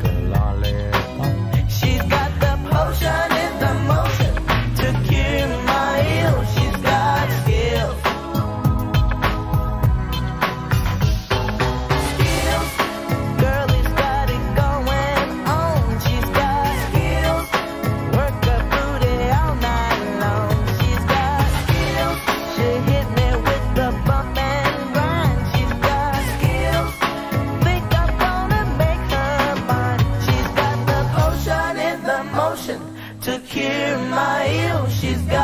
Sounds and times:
Reggae: 0.0 - 35.4.

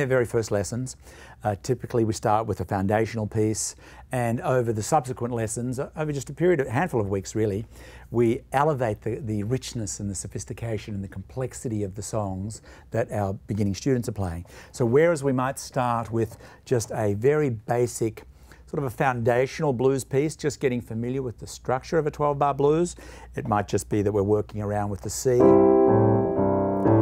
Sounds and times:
Speech: 0.0 - 25.6.

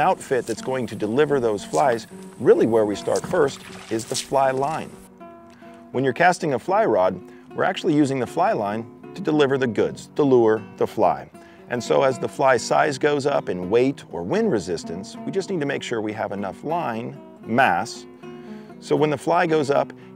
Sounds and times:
Speech: 0.0 - 4.9, 6.0 - 18.1, 18.8 - 19.9
Music: 0.0 - 20.1.

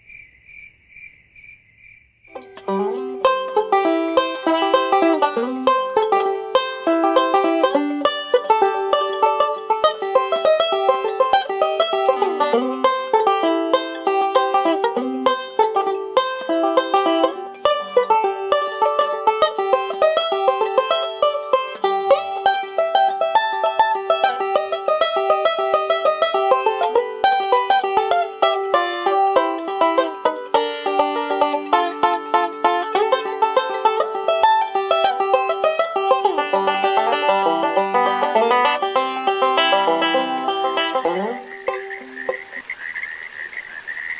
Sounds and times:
Music: 2.4 - 41.9.

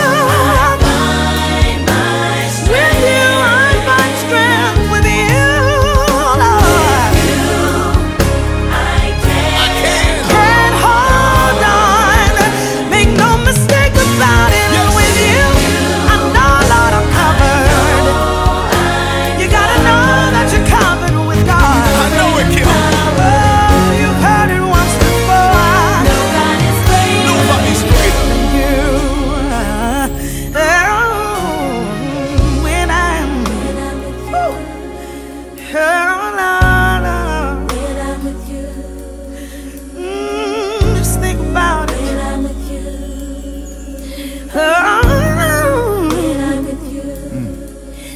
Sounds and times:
Singing: 0.0 - 35.0, 40.0 - 48.1
Pop music: 0.0 - 48.1.

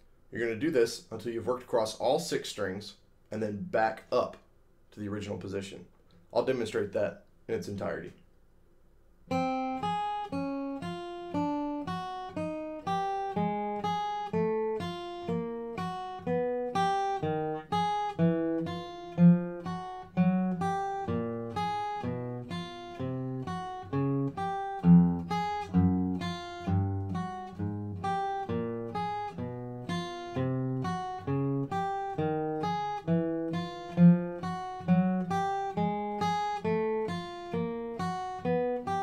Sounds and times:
Acoustic guitar: 9.3 - 39.0.

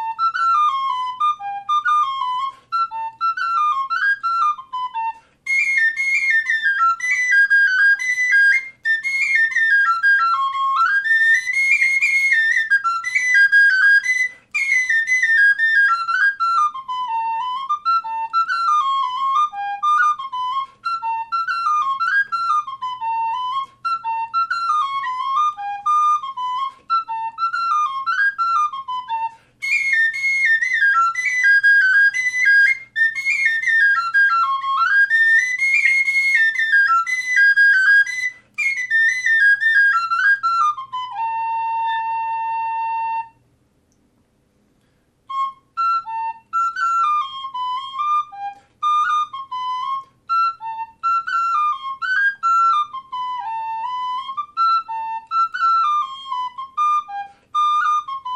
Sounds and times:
Whistle: 0.0 - 43.5, 45.3 - 58.3.

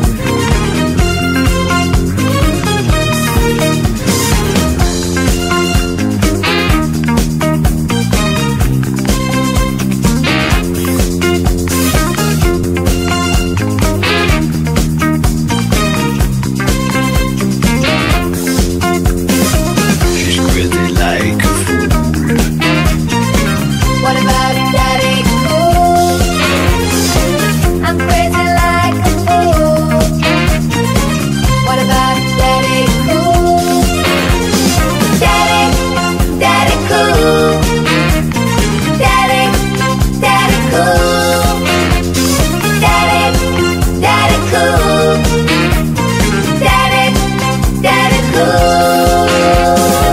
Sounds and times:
Music: 0.0 - 50.1.

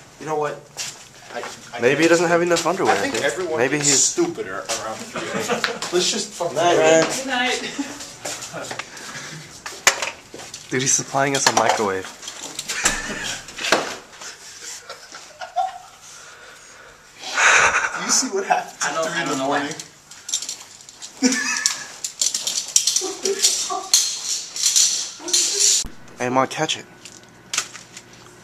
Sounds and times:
Speech: 10.7 - 12.1, 26.2 - 26.9.

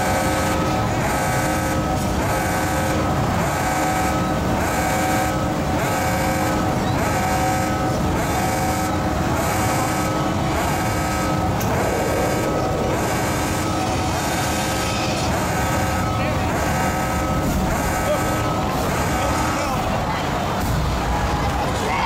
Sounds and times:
Speech: 16.1 - 16.8, 18.0 - 22.0.

